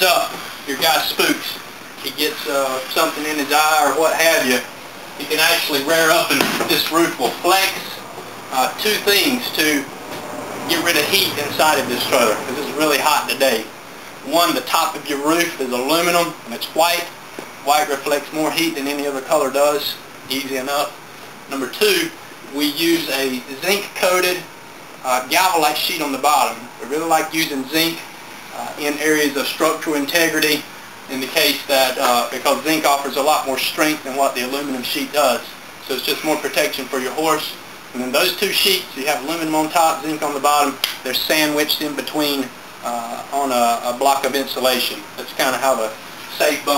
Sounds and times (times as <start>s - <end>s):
Speech: 0.0s - 9.9s, 10.7s - 46.7s.